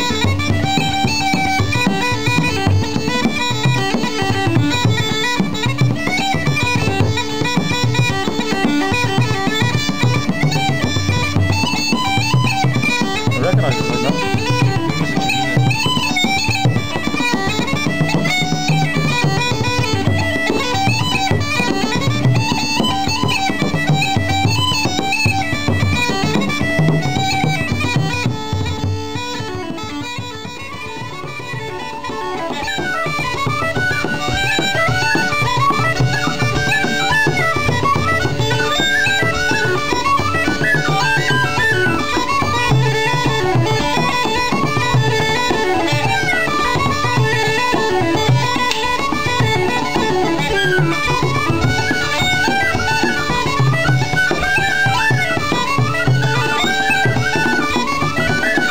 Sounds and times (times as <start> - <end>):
Bagpipes: 0.0 - 58.7.